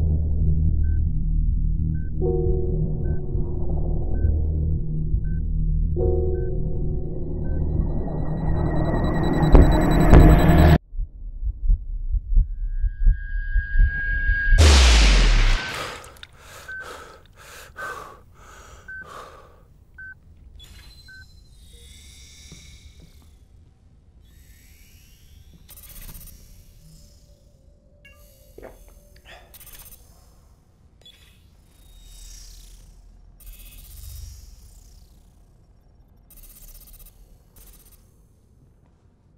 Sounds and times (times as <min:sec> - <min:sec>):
Music: 0:00.0 - 0:10.8.